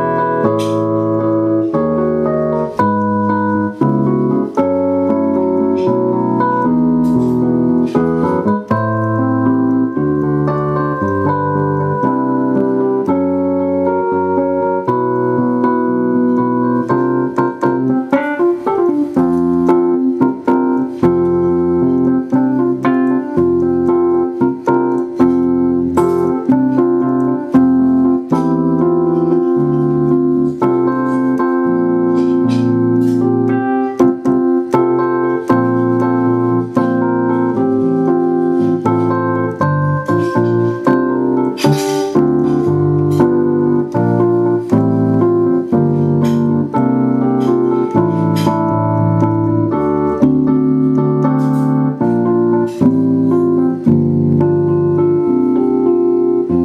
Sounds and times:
Hammond organ: 0.0s - 56.6s
Piano: 0.0s - 56.6s.

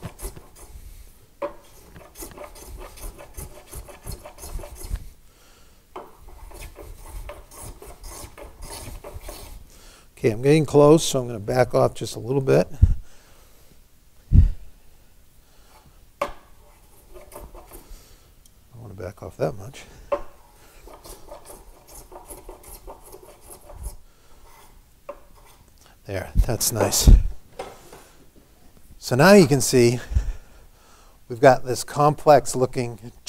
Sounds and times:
Rub: 0.0s - 0.8s, 1.7s - 5.0s, 6.3s - 9.6s, 16.6s - 17.9s, 20.7s - 25.6s
Filing (rasp): 0.0s - 0.9s, 1.6s - 5.1s, 6.0s - 9.6s, 16.6s - 17.9s, 20.7s - 25.6s
Wood: 1.4s - 4.9s, 6.0s - 9.6s, 16.2s - 17.8s, 20.1s - 25.6s.

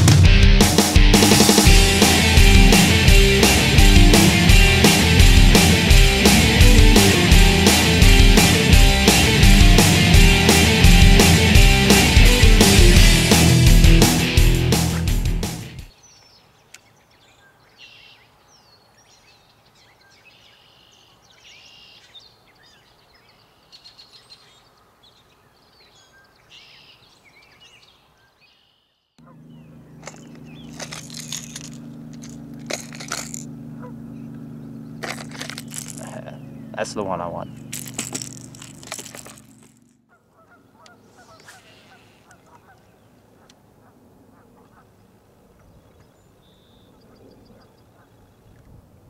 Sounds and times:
Environmental noise: 15.8s - 49.0s.

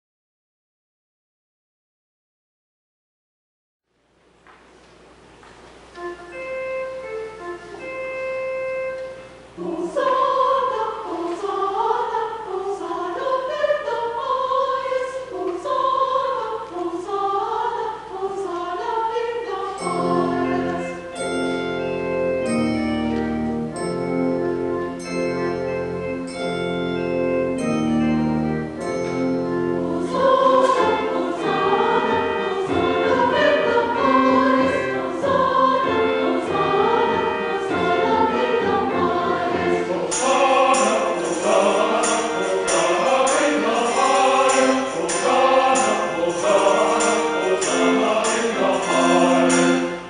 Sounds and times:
Music: 5.4s - 50.0s.

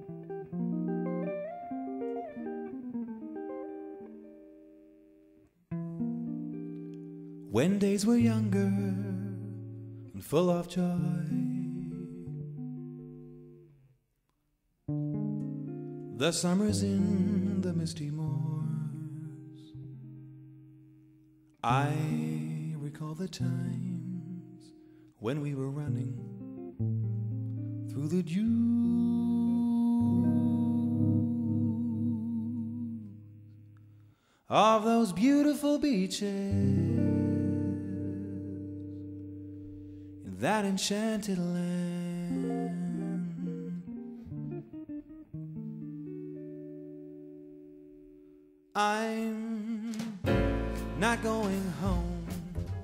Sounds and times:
Music: 0.0s - 13.9s, 14.9s - 34.6s, 35.5s - 52.8s.

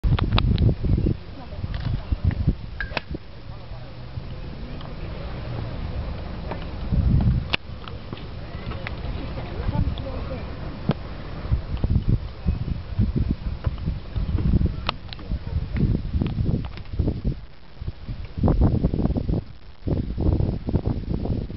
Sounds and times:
Speech: 1.2s - 2.4s, 3.2s - 6.4s, 8.0s - 10.6s, 11.6s - 13.7s.

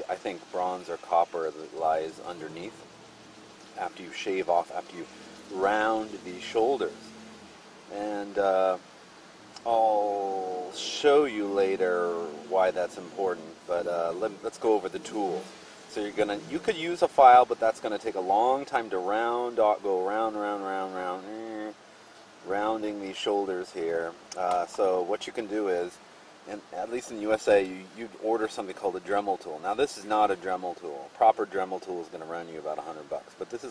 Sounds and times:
Speech: 0.0s - 2.8s, 3.8s - 7.1s, 7.9s - 8.8s, 9.6s - 21.8s, 22.4s - 33.7s.

